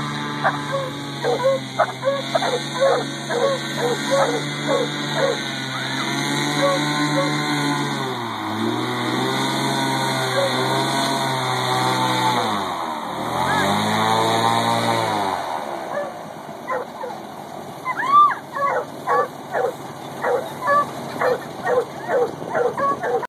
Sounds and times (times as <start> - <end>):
Bow-wow: 0.4 - 5.4, 6.6 - 7.4, 16.7 - 17.2, 18.6 - 23.2
Yip: 0.4 - 5.4, 6.6 - 7.3, 16.7 - 17.2, 17.9 - 23.2.